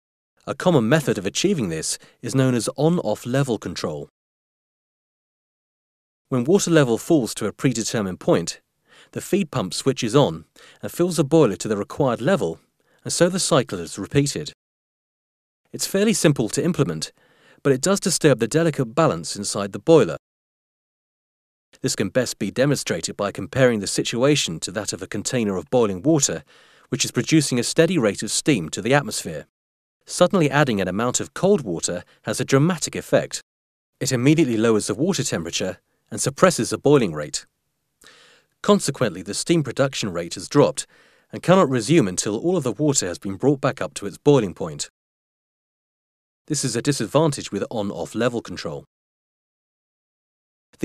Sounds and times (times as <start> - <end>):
Speech: 0.4 - 4.1, 6.3 - 14.6, 15.8 - 20.2, 21.8 - 29.5, 30.1 - 33.4, 34.0 - 37.5, 38.6 - 44.9, 46.5 - 48.9.